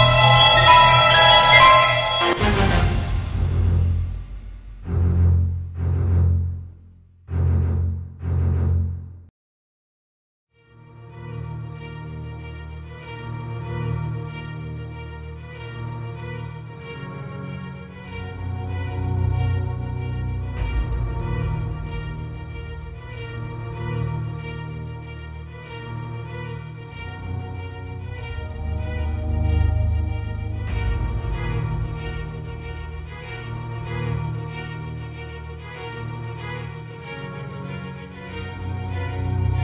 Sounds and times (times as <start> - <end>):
Music: 0.0 - 9.0, 10.5 - 39.6.